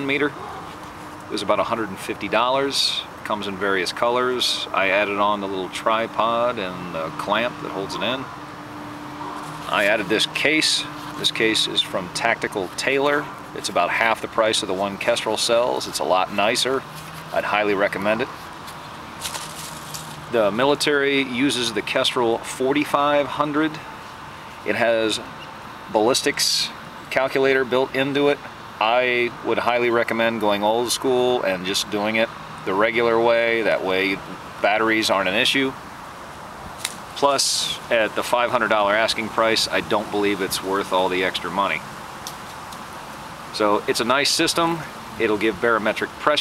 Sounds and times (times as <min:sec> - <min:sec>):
Speech: 0:00.0 - 0:00.4, 0:01.3 - 0:08.3, 0:09.7 - 0:18.3, 0:20.3 - 0:23.9, 0:24.6 - 0:35.8, 0:37.2 - 0:41.8, 0:43.5 - 0:46.4.